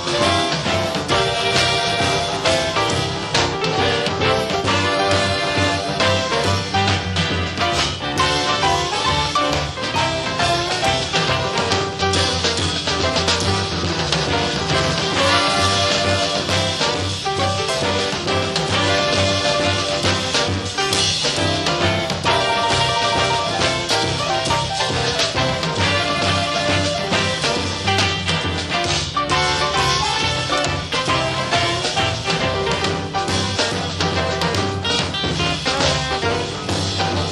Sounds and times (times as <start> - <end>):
Blues: 0.0 - 37.3.